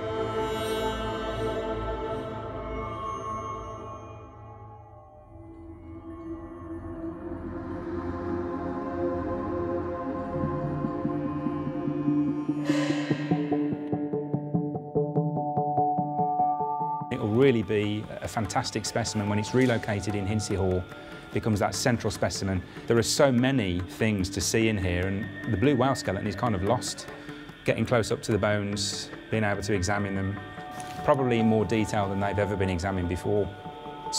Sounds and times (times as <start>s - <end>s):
Ambient music: 0.0s - 34.1s.